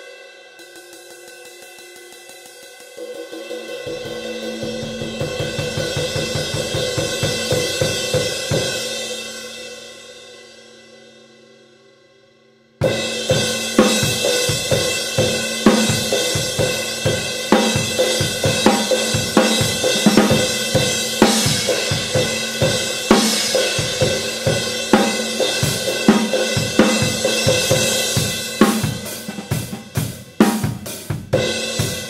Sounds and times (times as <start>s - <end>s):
Cymbal: 0.0s - 32.1s.